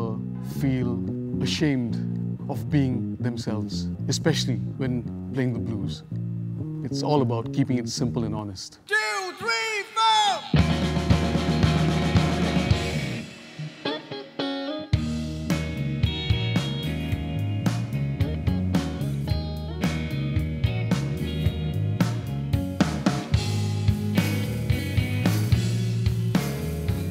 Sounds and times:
Music: 0.0s - 8.8s, 10.4s - 27.1s.

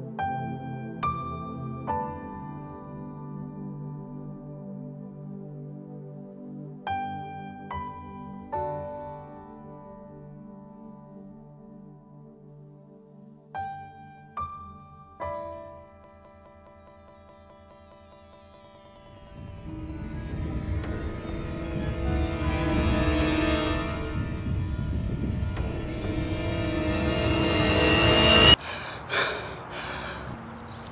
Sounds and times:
New-age music: 0.0s - 29.4s.

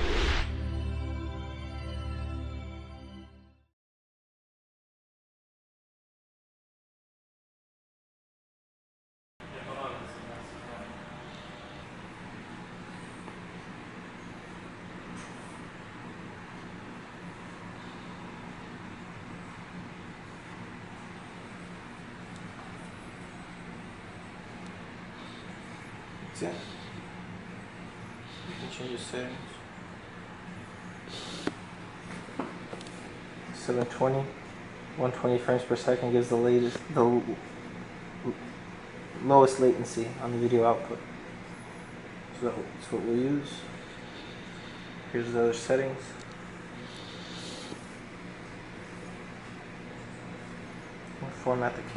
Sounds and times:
Speech: 9.4s - 11.1s, 26.3s - 26.6s, 28.6s - 29.6s, 33.6s - 34.4s, 35.0s - 37.4s, 39.2s - 41.1s, 42.4s - 43.7s, 45.1s - 46.2s, 51.2s - 51.9s.

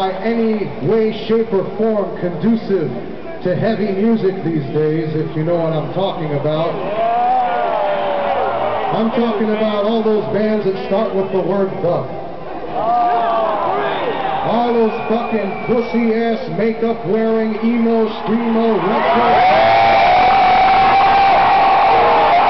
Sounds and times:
Male speech, man speaking: 0.0s - 6.8s, 8.9s - 12.1s, 14.4s - 19.5s
Narration, monologue: 0.0s - 6.8s, 8.9s - 12.4s, 14.4s - 19.3s.

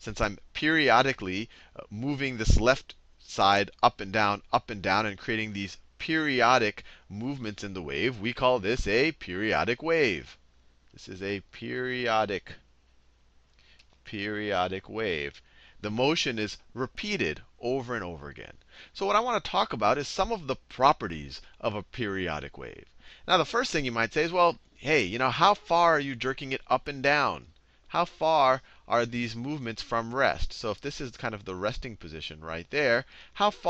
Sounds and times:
Speech: 0.0s - 10.4s, 11.0s - 12.6s, 14.0s - 33.6s.

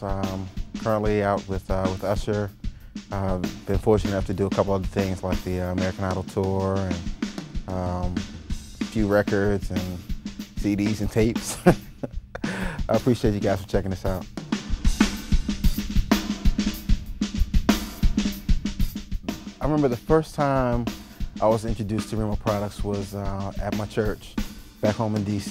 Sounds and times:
Bass drum: 0.0s - 25.5s
Drum kit: 0.0s - 25.5s
Drum roll: 0.0s - 25.5s.

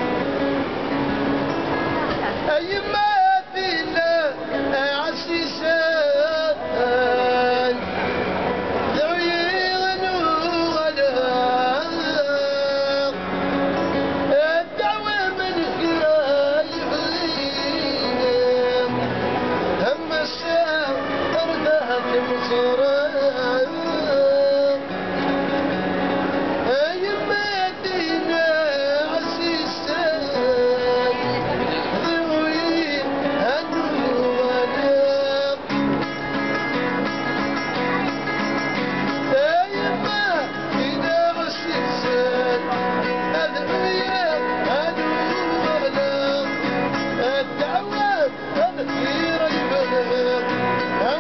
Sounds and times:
Music: 0.0s - 51.2s.

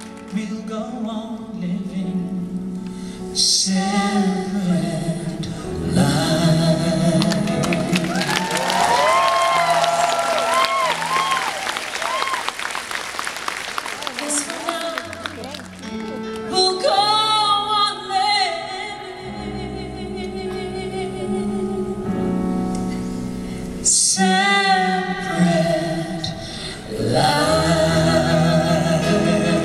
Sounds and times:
Singing: 24.0s - 29.6s.

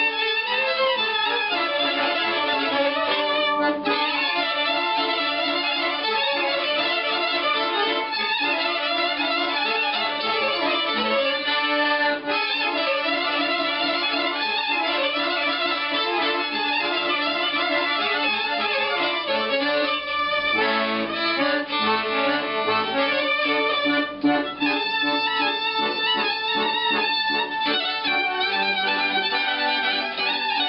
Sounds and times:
Violin, fiddle: 0.0s - 30.6s.

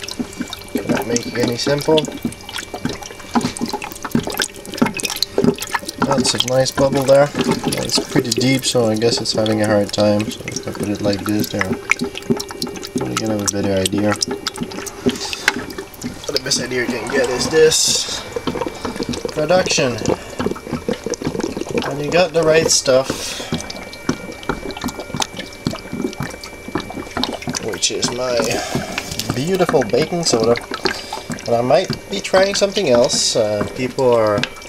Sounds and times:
Speech: 0.8s - 2.1s, 6.1s - 11.8s, 13.0s - 14.2s, 16.3s - 18.2s, 19.4s - 20.1s, 21.8s - 23.1s, 27.6s - 28.7s, 29.3s - 30.6s, 31.5s - 34.4s.

